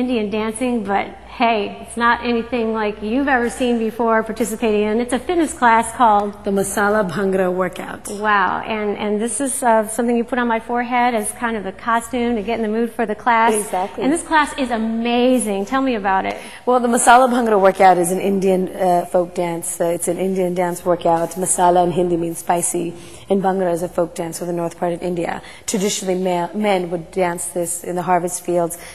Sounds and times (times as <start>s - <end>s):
Speech: 0.0s - 28.7s.